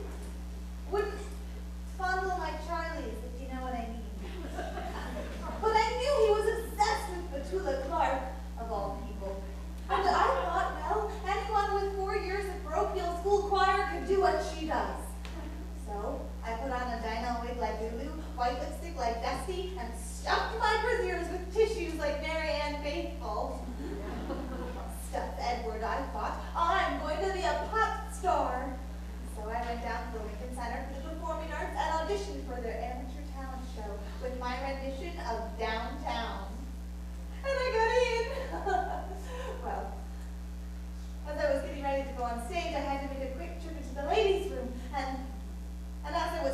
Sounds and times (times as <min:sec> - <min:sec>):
Speech: 0:00.9 - 0:04.4, 0:05.4 - 0:36.7, 0:37.4 - 0:40.0, 0:41.2 - 0:45.4, 0:46.0 - 0:46.5.